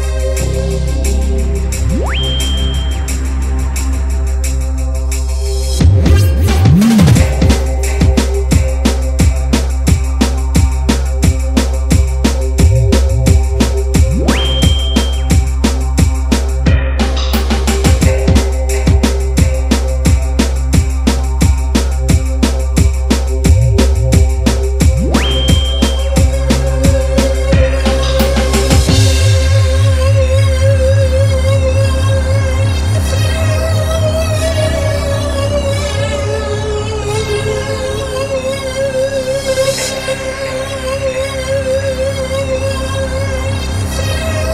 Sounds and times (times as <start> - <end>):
Synthesizer: 0.0 - 44.5.